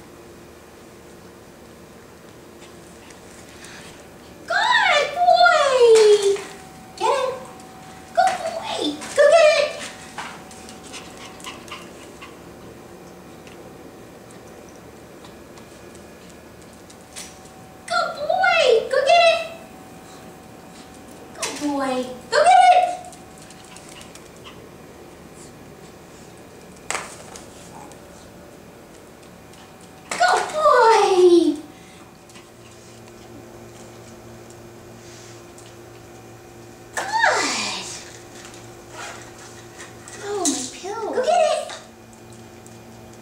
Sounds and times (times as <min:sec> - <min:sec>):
Speech: 0:04.5 - 0:07.5, 0:08.2 - 0:09.9, 0:17.9 - 0:19.6, 0:21.4 - 0:23.1, 0:30.2 - 0:31.7, 0:37.0 - 0:38.1, 0:40.2 - 0:41.9.